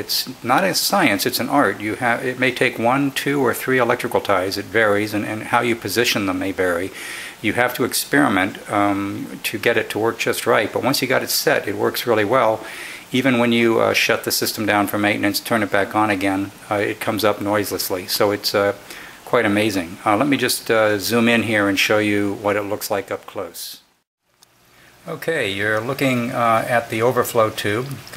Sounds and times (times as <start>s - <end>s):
Speech: 0.0s - 23.9s, 25.0s - 28.1s.